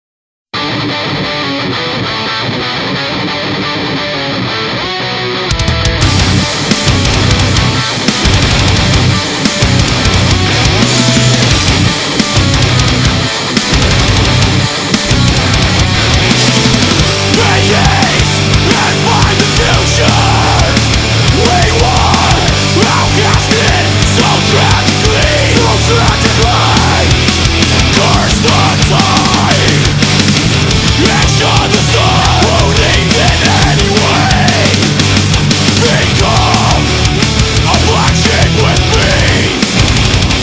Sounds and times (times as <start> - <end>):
Music: 0.6 - 40.4.